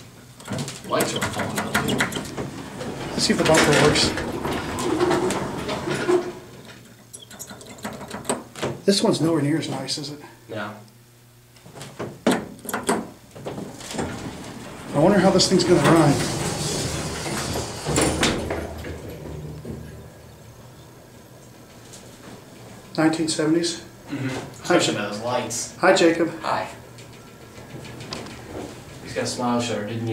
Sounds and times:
Speech: 0:00.8 - 0:01.9, 0:03.1 - 0:04.2, 0:08.9 - 0:10.9, 0:14.9 - 0:16.3, 0:23.0 - 0:23.9, 0:24.6 - 0:26.8, 0:29.0 - 0:30.1.

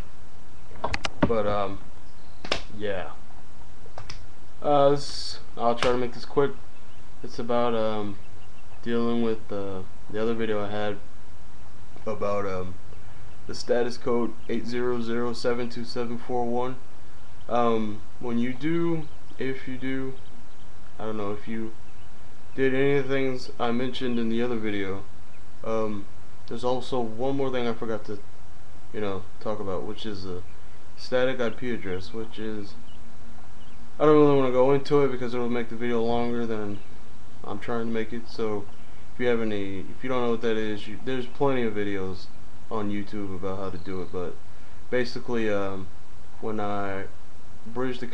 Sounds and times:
Speech: 0:01.2 - 0:01.8, 0:02.7 - 0:03.2, 0:04.6 - 0:06.6, 0:07.2 - 0:08.2, 0:08.8 - 0:11.0, 0:12.0 - 0:12.8, 0:13.5 - 0:16.8, 0:17.5 - 0:20.2, 0:21.0 - 0:21.8, 0:22.6 - 0:28.2, 0:29.0 - 0:32.8, 0:34.0 - 0:36.8, 0:37.4 - 0:48.1.

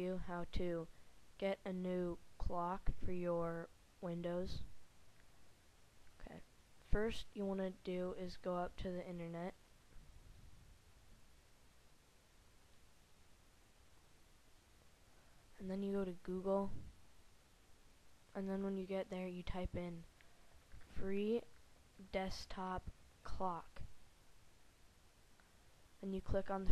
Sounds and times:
Speech: 0:00.0 - 0:04.7, 0:06.2 - 0:09.6, 0:15.6 - 0:16.9, 0:18.4 - 0:20.1, 0:20.9 - 0:23.9, 0:26.0 - 0:26.7.

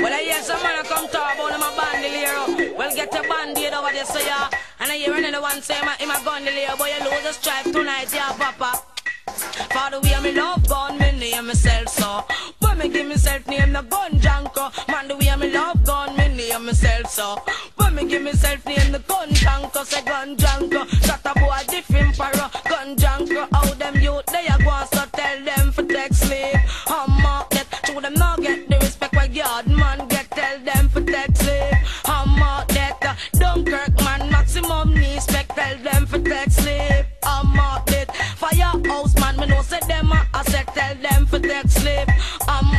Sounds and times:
Music: 0:00.0 - 0:42.7.

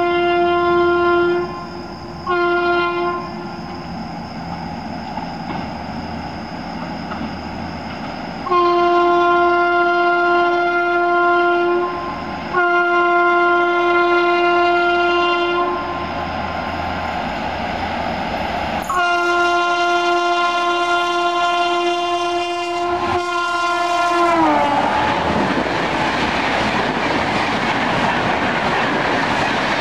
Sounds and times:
Train horn: 0:00.0 - 0:03.7, 0:08.4 - 0:16.2, 0:18.8 - 0:25.5
Railroad car, train wagon: 0:00.0 - 0:29.8
Clickety-clack: 0:04.5 - 0:05.8, 0:06.8 - 0:08.2, 0:25.1 - 0:29.8.

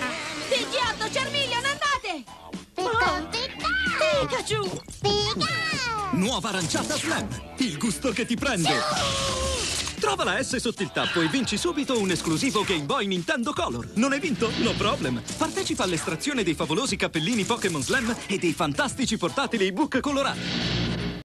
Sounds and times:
Music: 0:00.0 - 0:21.2
Speech: 0:10.0 - 0:20.4.

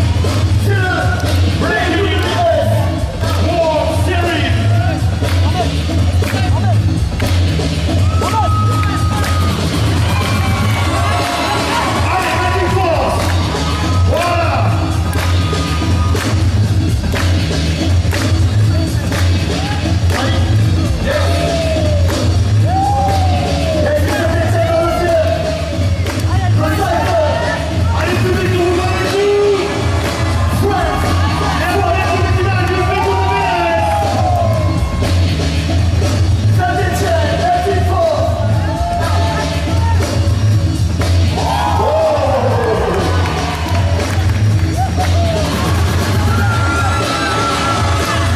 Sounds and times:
Music: 0:00.0 - 0:48.3.

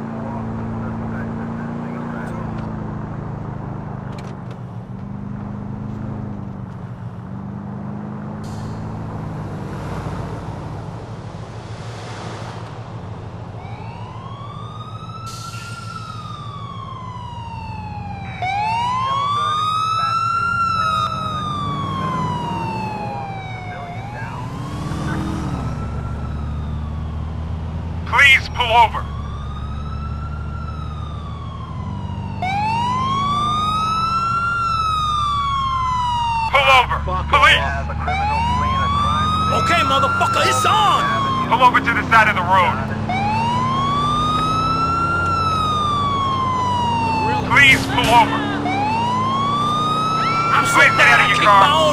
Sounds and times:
Police car (siren): 0:00.0 - 0:11.8, 0:12.7 - 0:51.9
Car passing by: 0:07.4 - 0:13.1, 0:37.8 - 0:51.9.

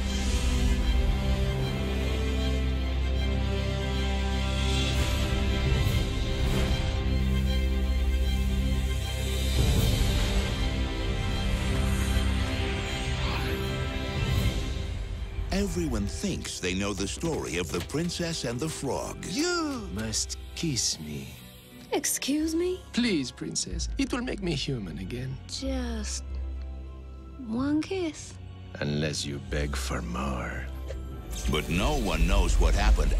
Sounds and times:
Music: 0:00.0 - 0:33.1.

